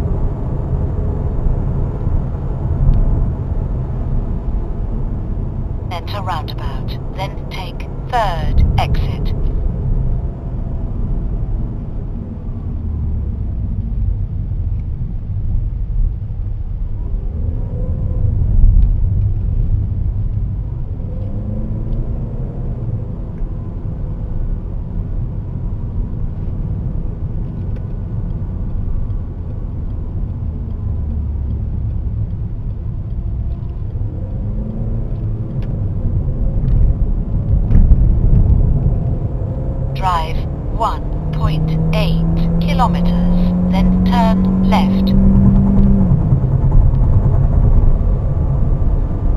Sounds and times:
Car: 0.0 - 49.3
Rumble: 0.0 - 49.3.

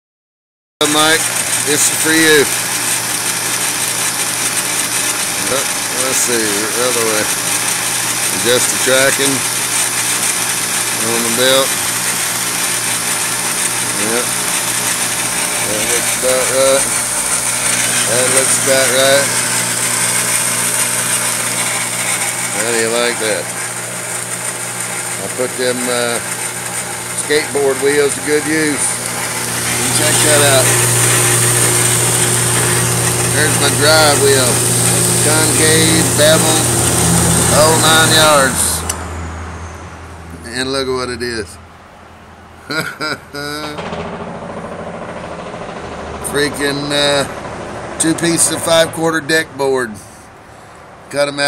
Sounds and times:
Speech: 0.8 - 2.5, 5.4 - 7.3, 8.3 - 9.4, 11.0 - 11.7, 13.9 - 14.3, 15.6 - 16.9, 18.1 - 19.3, 22.5 - 23.5, 25.2 - 26.2, 27.2 - 28.9, 29.8 - 30.8, 33.3 - 34.6, 35.2 - 36.7, 37.5 - 38.8, 40.4 - 41.6, 46.2 - 47.3, 48.0 - 50.2, 51.1 - 51.4
Vibration: 0.8 - 39.2, 43.3 - 49.7
Engine: 0.8 - 51.4.

